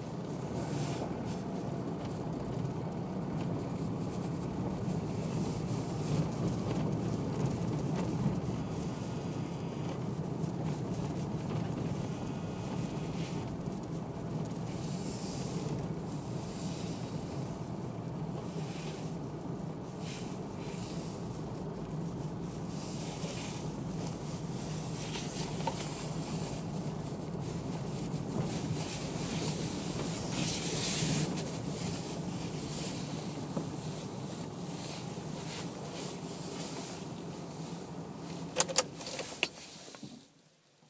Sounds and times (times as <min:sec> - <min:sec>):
Vehicle: 0:00.0 - 0:40.9.